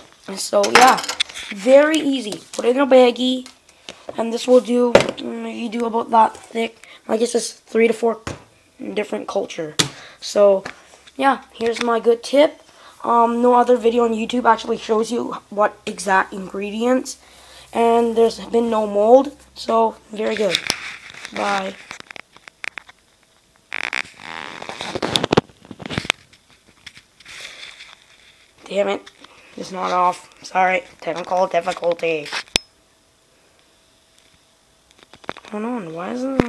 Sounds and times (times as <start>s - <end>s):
Speech: 0.3s - 3.5s, 4.2s - 20.6s, 21.3s - 21.8s, 28.6s - 32.4s, 35.5s - 36.4s.